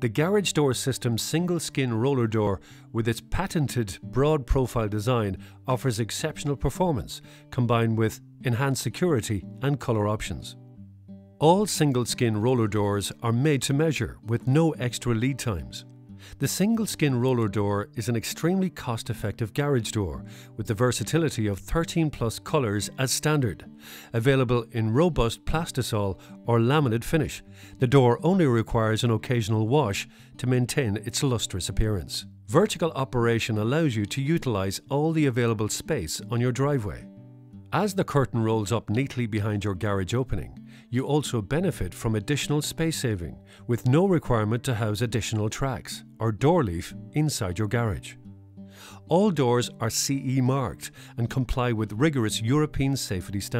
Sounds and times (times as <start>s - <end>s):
Speech: 0.0s - 10.6s, 11.4s - 15.8s, 16.4s - 37.1s, 37.8s - 48.2s, 49.1s - 53.5s.